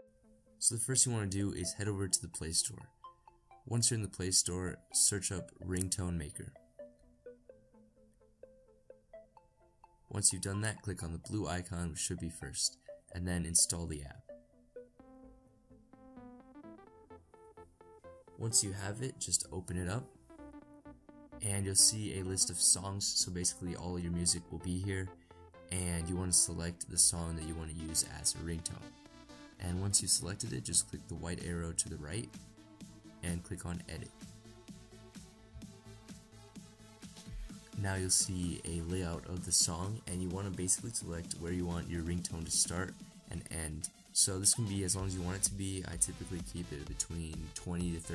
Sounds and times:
Speech: 0.6s - 2.9s, 3.7s - 6.6s, 10.1s - 14.2s, 18.4s - 20.1s, 21.4s - 25.1s, 25.7s - 28.9s, 29.6s - 32.3s, 33.2s - 34.2s, 37.8s - 48.1s.

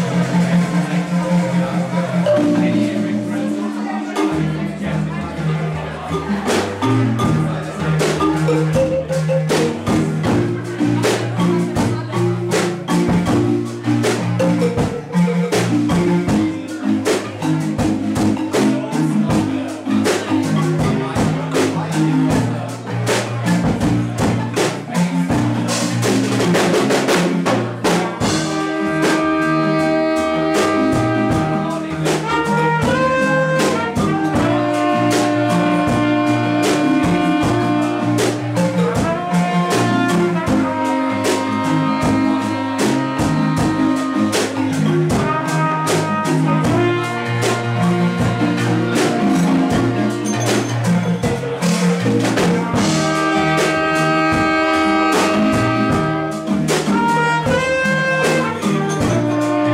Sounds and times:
Speech: 0.0s - 53.8s
Marimba, xylophone: 0.0s - 59.7s.

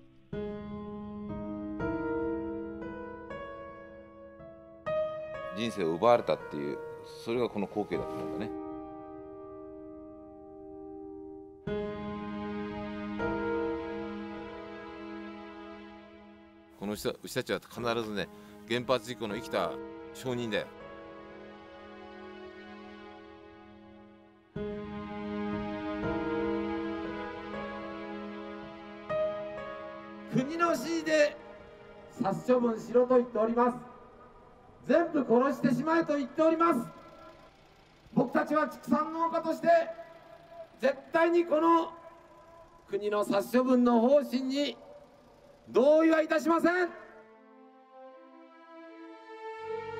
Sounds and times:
Music: 0.0s - 50.0s
Speech: 5.6s - 8.5s, 16.8s - 20.7s, 30.3s - 31.4s, 32.2s - 33.8s, 34.9s - 36.9s, 38.2s - 40.0s, 40.8s - 41.9s, 42.9s - 44.8s, 45.7s - 47.0s.

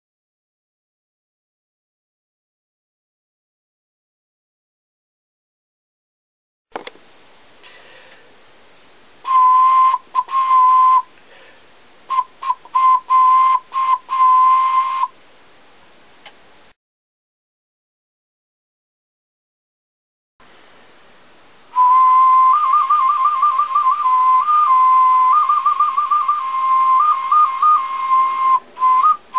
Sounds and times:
Whistle: 9.3s - 11.1s, 12.1s - 15.2s, 21.8s - 29.3s.

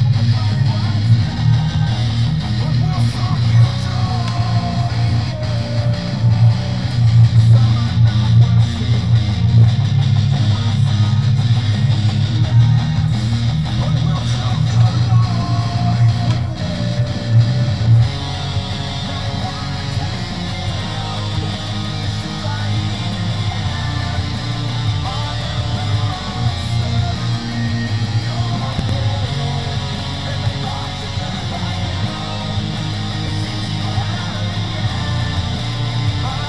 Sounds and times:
Electric guitar: 0.0s - 36.4s.

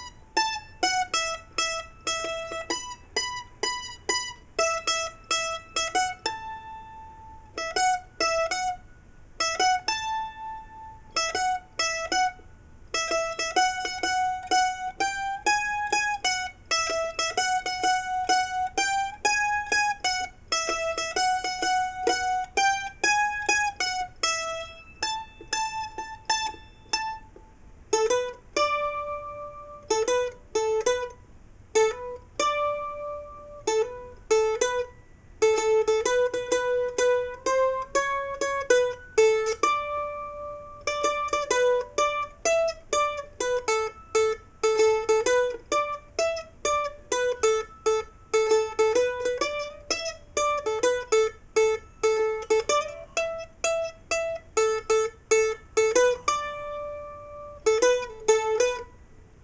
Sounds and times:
Ukulele: 0.0s - 59.4s.

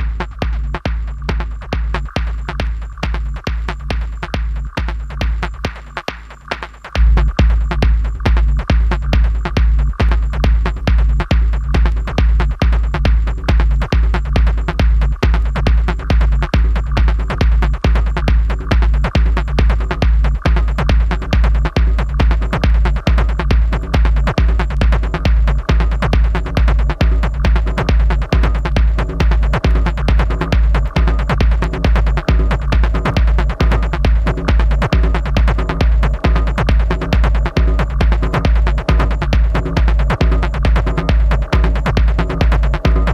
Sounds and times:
Techno: 0.0s - 43.1s.

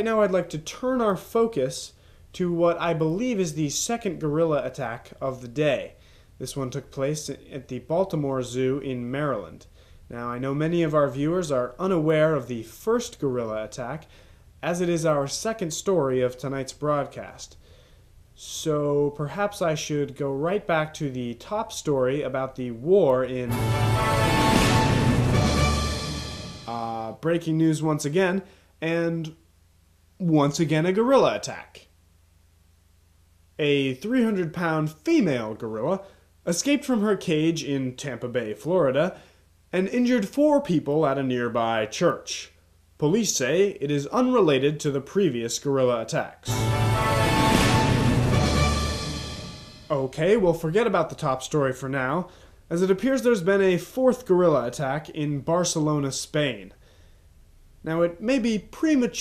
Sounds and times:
Speech: 0.0s - 17.6s, 18.4s - 23.6s, 26.7s - 29.4s, 30.2s - 31.9s, 33.6s - 46.5s, 49.9s - 56.8s, 57.8s - 59.2s.

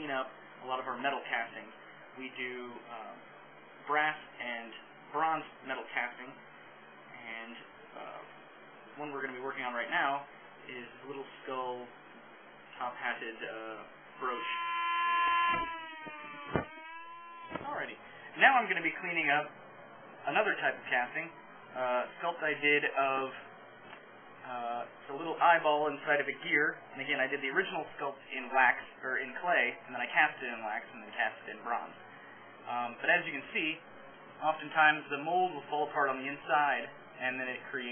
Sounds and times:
Speech: 0.0s - 6.4s, 7.1s - 8.3s, 8.9s - 12.0s, 12.7s - 14.6s, 17.6s - 19.6s, 20.2s - 23.5s, 24.4s - 32.0s, 32.6s - 33.8s, 34.4s - 37.9s.

